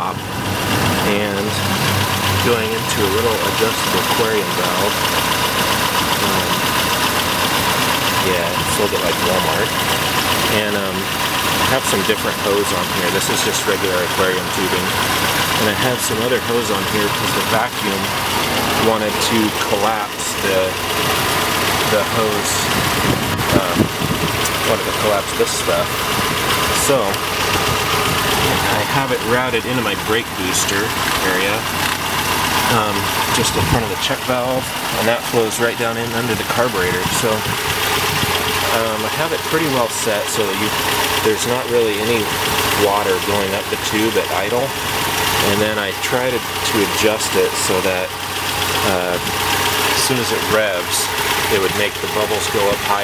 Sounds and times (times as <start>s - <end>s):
Speech: 0.0s - 0.2s, 1.0s - 1.7s, 2.4s - 5.1s, 6.1s - 6.8s, 8.2s - 9.8s, 10.5s - 18.2s, 18.8s - 20.8s, 21.8s - 22.8s, 23.5s - 23.9s, 24.5s - 25.9s, 26.7s - 27.2s, 28.4s - 31.7s, 32.6s - 37.6s, 38.6s - 44.8s, 45.4s - 48.2s, 48.8s - 53.0s
Car: 0.0s - 53.0s
Engine: 0.0s - 53.0s.